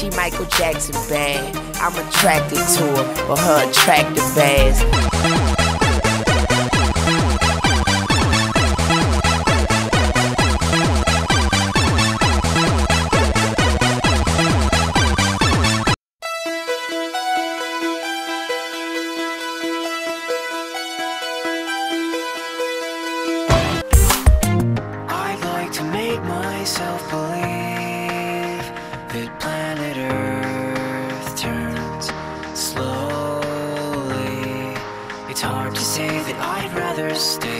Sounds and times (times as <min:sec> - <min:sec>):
Background music: 0:00.0 - 0:12.4, 0:16.2 - 0:37.5.